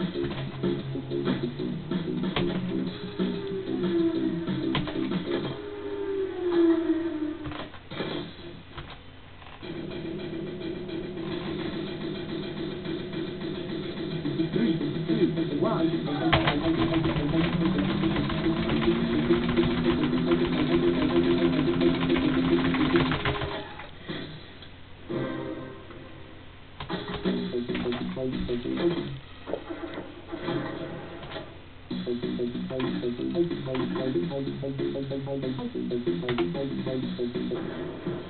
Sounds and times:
Music: 0:00.0 - 0:08.7, 0:09.6 - 0:38.3.

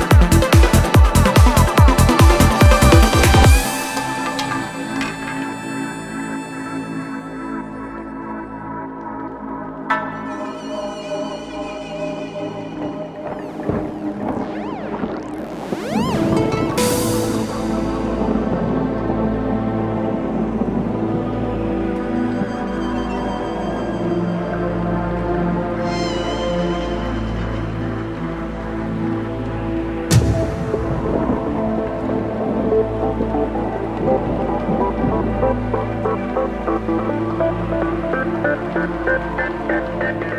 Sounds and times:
Electronic music: 0:00.0 - 0:19.5, 0:30.1 - 0:40.3.

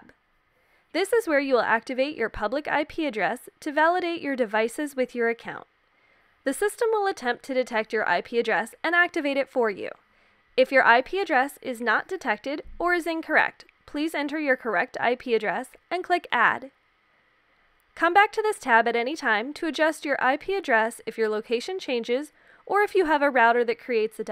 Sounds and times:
Speech: 0:01.0 - 0:05.7, 0:06.5 - 0:10.0, 0:10.6 - 0:16.8, 0:18.0 - 0:24.3.

